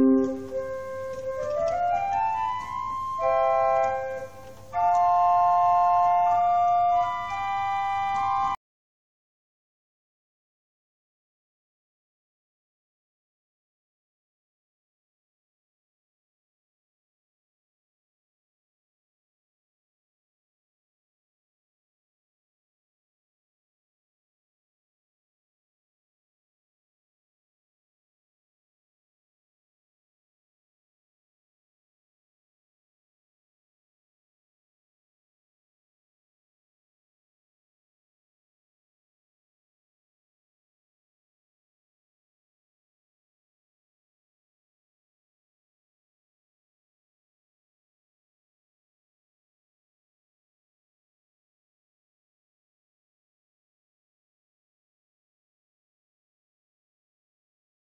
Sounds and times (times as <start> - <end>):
Hammond organ: 0.0 - 8.6.